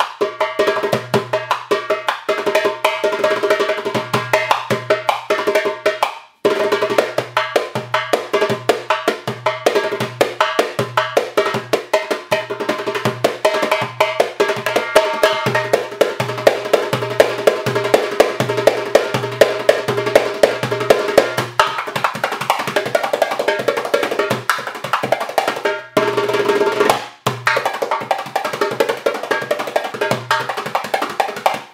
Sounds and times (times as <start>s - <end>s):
Music: 0.0s - 31.7s.